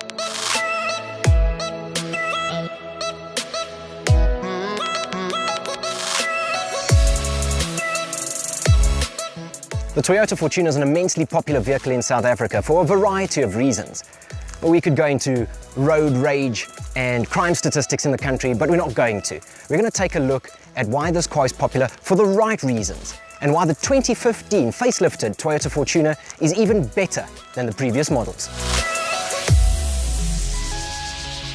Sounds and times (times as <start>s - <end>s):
Music: 0.0s - 31.5s
Speech: 10.0s - 14.0s, 14.6s - 28.5s.